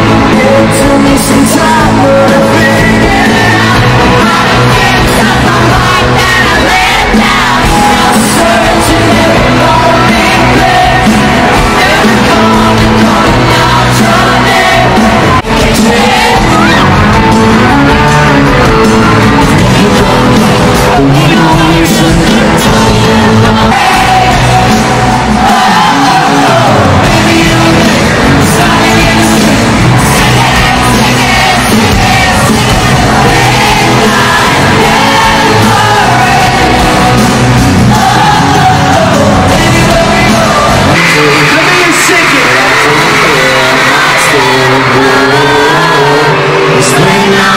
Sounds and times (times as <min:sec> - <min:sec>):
Inside, public space: 0:00.0 - 0:47.5
Pop music: 0:00.0 - 0:47.5
Singing: 0:00.0 - 0:47.5.